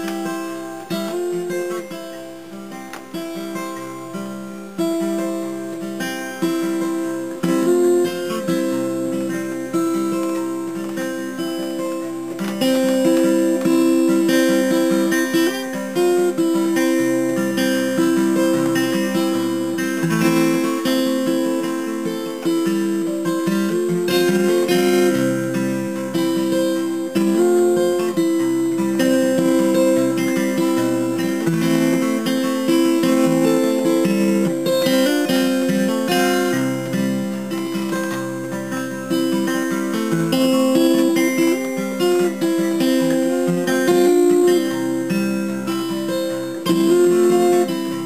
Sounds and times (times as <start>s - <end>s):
Acoustic guitar: 0.0s - 48.0s.